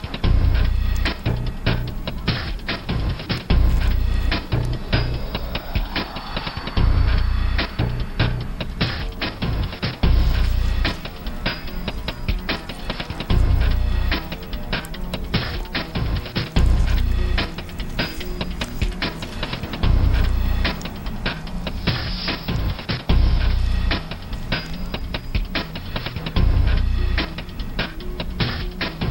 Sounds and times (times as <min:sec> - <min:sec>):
Music: 0:00.0 - 0:29.1.